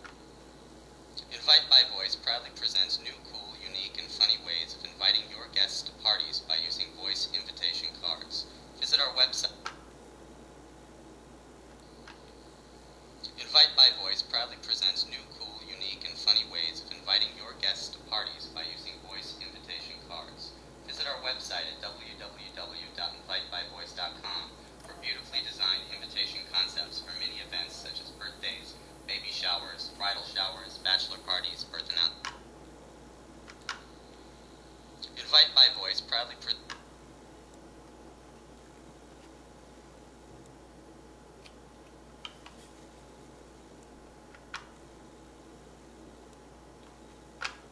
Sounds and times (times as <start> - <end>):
Speech: 1.2 - 9.7, 13.3 - 32.3, 35.0 - 36.7.